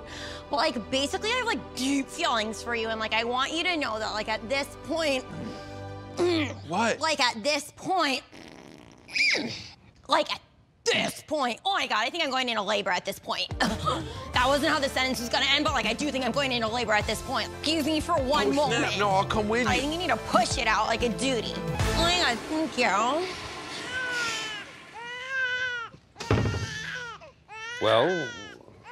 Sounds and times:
Music: 0:00.0 - 0:07.2, 0:13.3 - 0:23.8
Fart: 0:08.2 - 0:09.8.

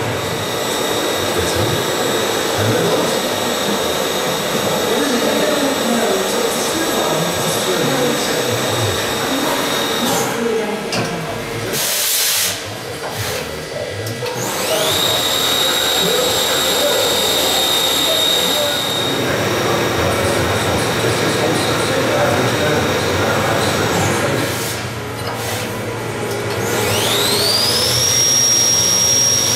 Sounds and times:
Speech: 0:01.2 - 0:24.9.

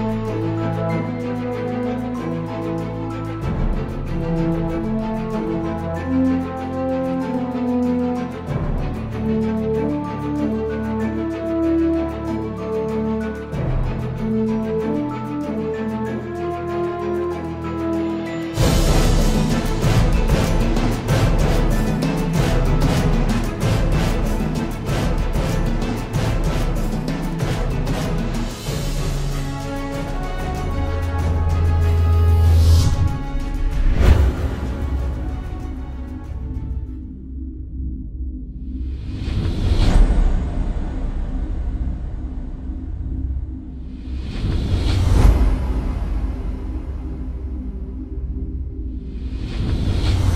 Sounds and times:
Music: 0:00.0 - 0:50.3.

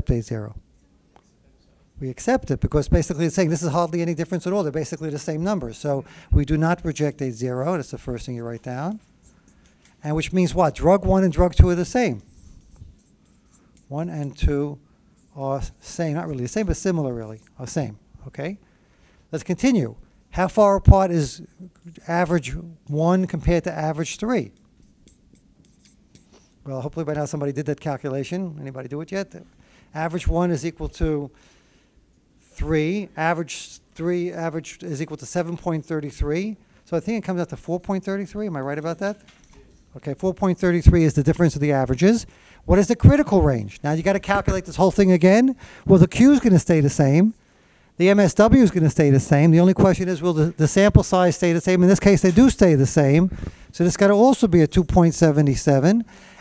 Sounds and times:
Writing: 0:11.6 - 0:14.4, 0:24.0 - 0:26.6.

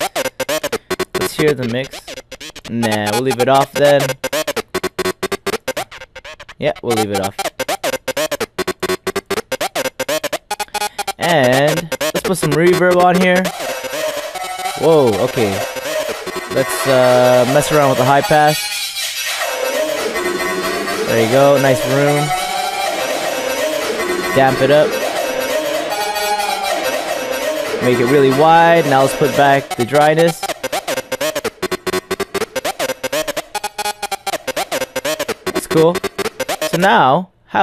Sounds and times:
Electronic music: 0:00.0 - 0:37.0
Synthesizer: 0:00.0 - 0:37.0.

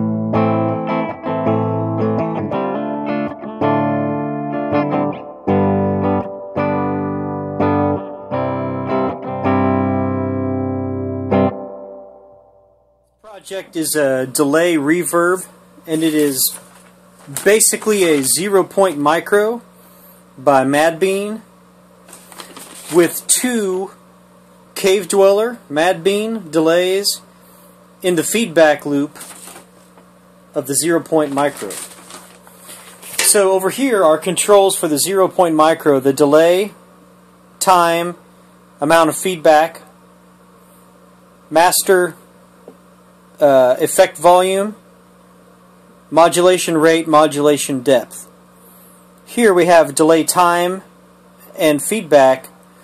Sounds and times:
Speech: 0:13.3 - 0:16.6, 0:17.3 - 0:19.7, 0:20.4 - 0:21.5, 0:22.9 - 0:24.0, 0:24.8 - 0:27.3, 0:28.0 - 0:29.2, 0:30.6 - 0:31.8, 0:33.2 - 0:36.8, 0:37.6 - 0:38.2, 0:38.8 - 0:40.0, 0:41.5 - 0:42.2, 0:43.4 - 0:44.8, 0:46.1 - 0:48.4, 0:49.3 - 0:52.6.

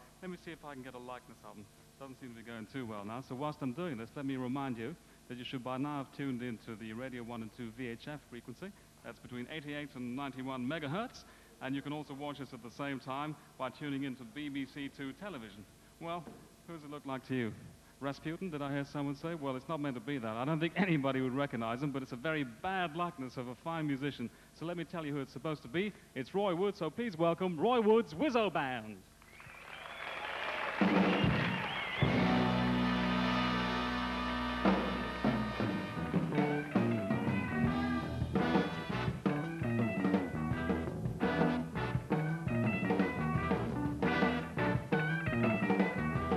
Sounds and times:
Speech: 0:00.2 - 0:29.1.

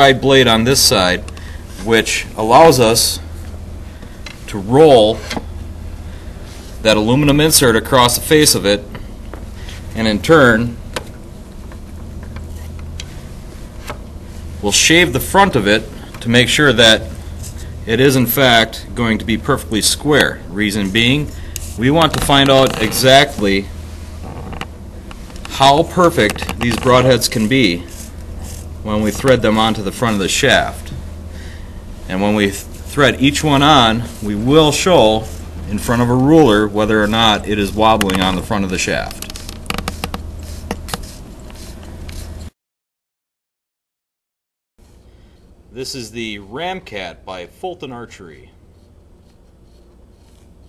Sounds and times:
Speech: 0:00.0 - 0:03.3, 0:04.5 - 0:05.3, 0:06.8 - 0:08.9, 0:10.0 - 0:10.8, 0:14.6 - 0:17.2, 0:17.8 - 0:23.7, 0:25.5 - 0:27.9, 0:28.8 - 0:31.0, 0:32.1 - 0:39.3, 0:45.7 - 0:48.6.

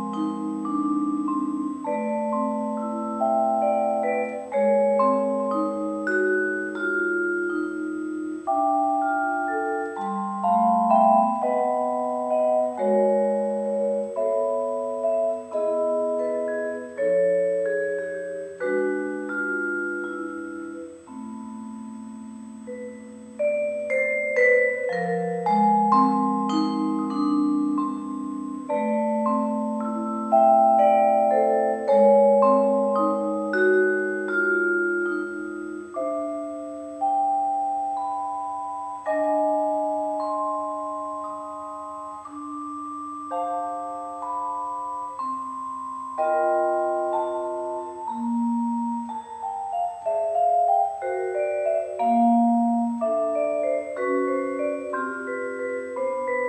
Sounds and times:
Marimba, xylophone: 0:00.0 - 0:56.4
Vibraphone: 0:00.0 - 0:56.4.

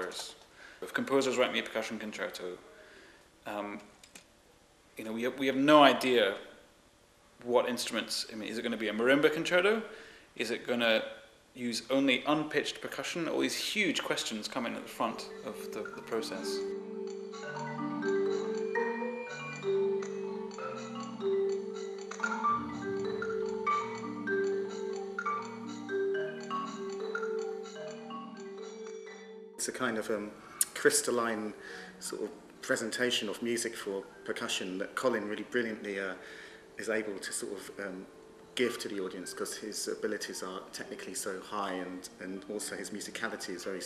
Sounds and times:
Speech: 0:00.0 - 0:02.8, 0:03.4 - 0:03.9, 0:05.0 - 0:06.5, 0:07.4 - 0:16.7, 0:29.6 - 0:36.2, 0:36.8 - 0:43.8
Percussion: 0:15.1 - 0:29.3.

